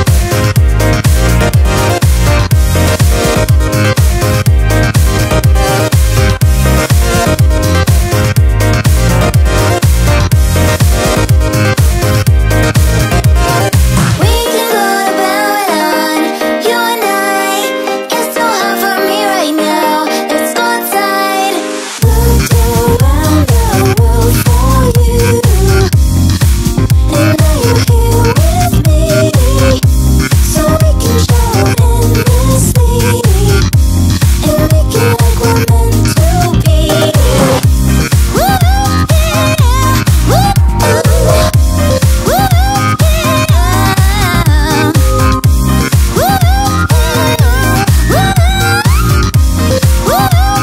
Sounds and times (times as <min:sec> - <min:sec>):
Dance music: 0:00.0 - 0:50.6.